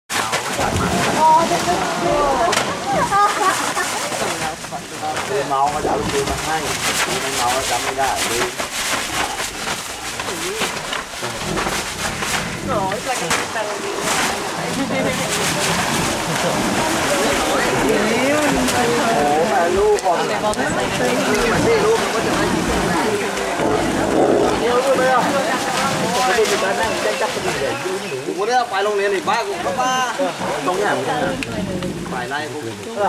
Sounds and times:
Roaring cats (lions, tigers): 0:08.9 - 0:13.1, 0:21.3 - 0:26.0.

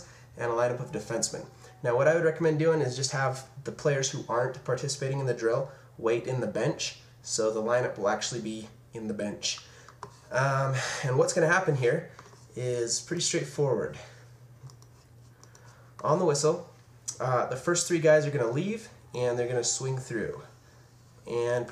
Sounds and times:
Inside, small room: 0:00.0 - 0:21.7
Speech: 0:00.4 - 0:09.7, 0:10.3 - 0:14.1, 0:16.0 - 0:20.5, 0:21.2 - 0:21.7
Clicking: 0:14.6 - 0:15.6.

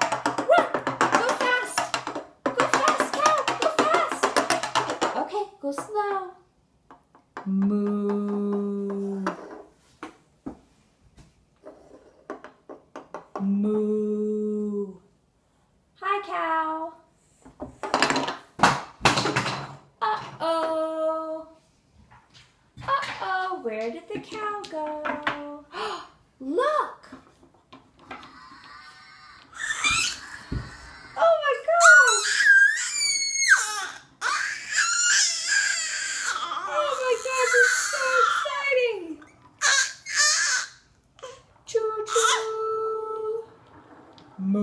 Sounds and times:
Speech: 0:00.5 - 0:01.9, 0:02.5 - 0:04.4, 0:05.2 - 0:06.4, 0:13.4 - 0:15.1, 0:16.0 - 0:17.1, 0:22.8 - 0:25.7, 0:26.4 - 0:27.2, 0:31.2 - 0:32.3, 0:36.7 - 0:39.2, 0:41.7 - 0:43.6.

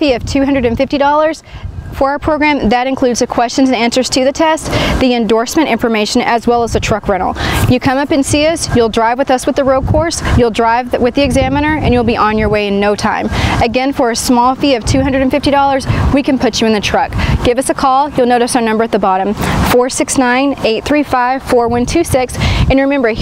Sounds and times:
Speech: 0:00.0 - 0:01.4, 0:02.0 - 0:23.2.

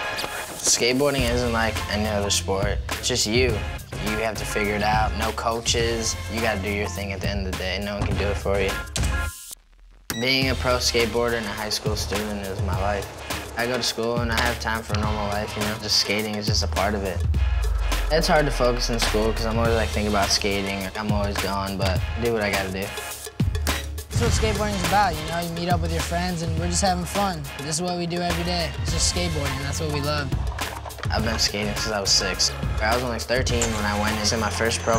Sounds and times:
Music: 0:00.0 - 0:34.9
Speech: 0:00.6 - 0:08.8, 0:10.2 - 0:17.2, 0:18.1 - 0:23.0, 0:24.1 - 0:30.4, 0:31.0 - 0:34.9.

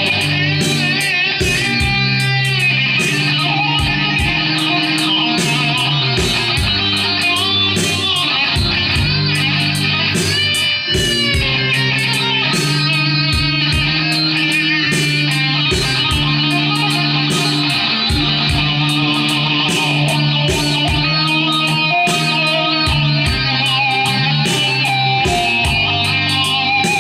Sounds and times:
Blues: 0:00.0 - 0:27.0
Strum: 0:00.0 - 0:27.0.

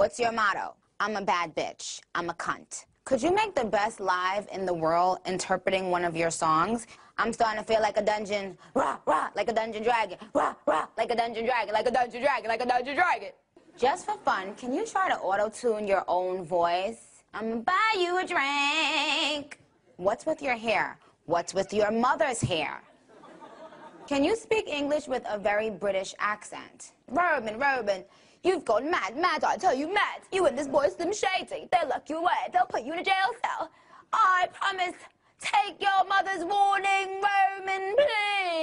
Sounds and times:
Speech: 0:00.0 - 0:22.8, 0:24.1 - 0:38.6.

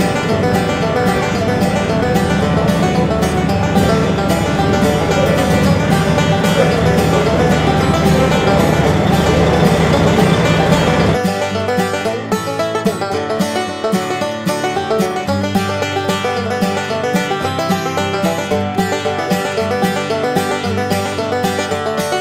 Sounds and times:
Music: 0:00.0 - 0:22.2.

